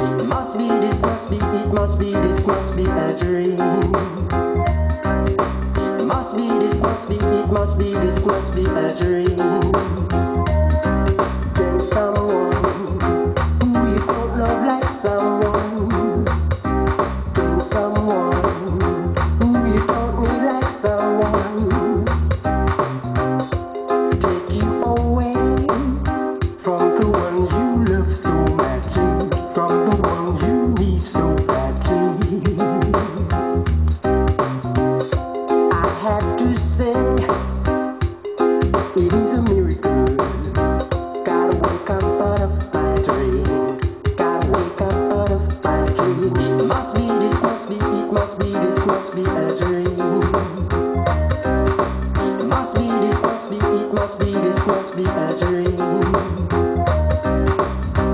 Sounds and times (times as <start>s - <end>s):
Music: 0.0s - 58.1s.